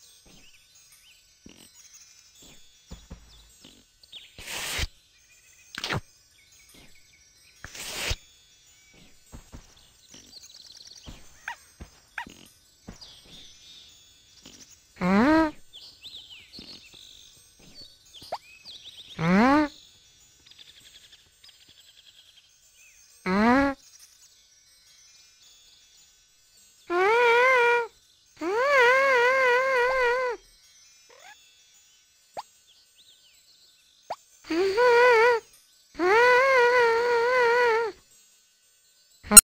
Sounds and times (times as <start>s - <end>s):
Music: 0.0s - 39.4s.